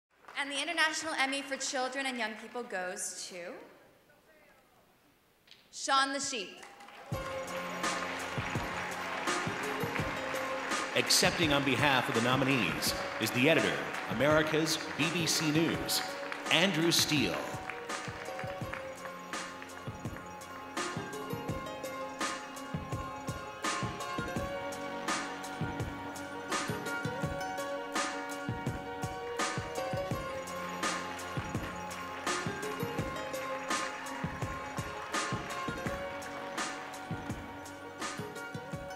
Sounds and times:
Music: 6.6s - 38.9s.

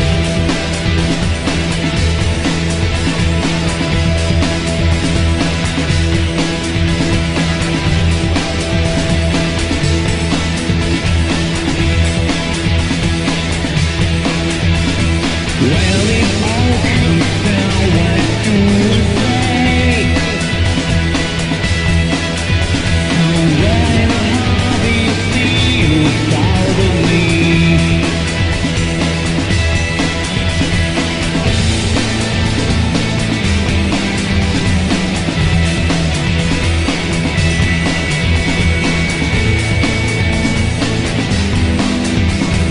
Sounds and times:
Music: 0.0s - 42.7s.

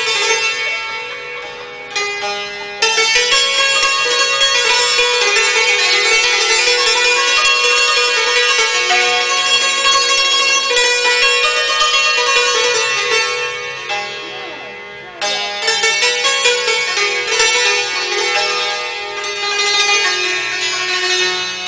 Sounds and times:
Folk music: 0.0s - 19.0s
Traditional music: 0.0s - 21.6s.

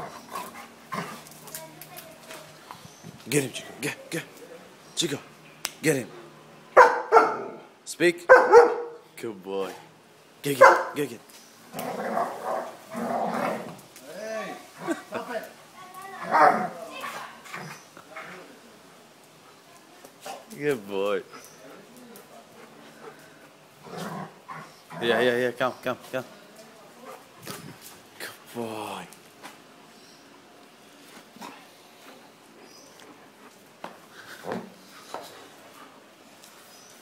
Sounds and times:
Bark: 6.8s - 7.6s, 8.3s - 9.0s, 10.6s - 11.0s, 16.3s - 16.7s.

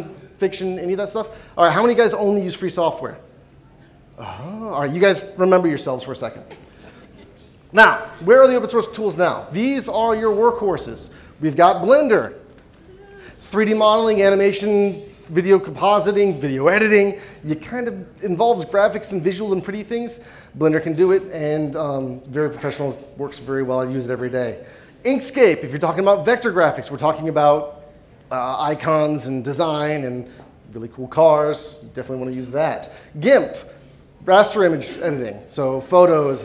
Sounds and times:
Speech: 0.0s - 3.3s, 4.2s - 6.6s, 7.2s - 12.4s, 13.4s - 36.4s.

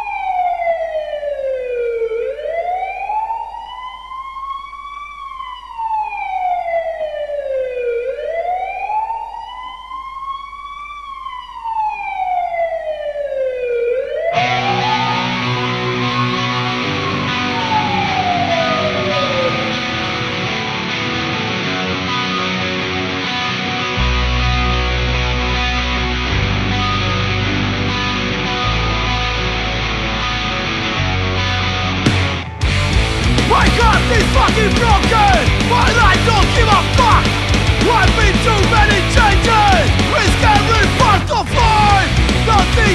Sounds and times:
Exciting music: 32.0s - 42.9s.

